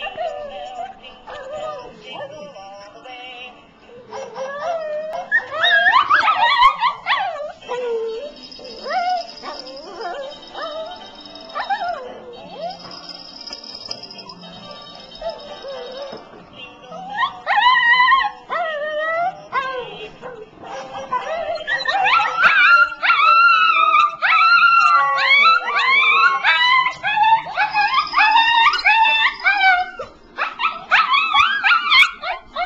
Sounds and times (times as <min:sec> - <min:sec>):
Whimper (dog): 0:00.0 - 0:02.6, 0:04.0 - 0:13.4, 0:15.2 - 0:16.3, 0:16.9 - 0:32.6
Yip: 0:04.1 - 0:13.2, 0:17.0 - 0:32.6.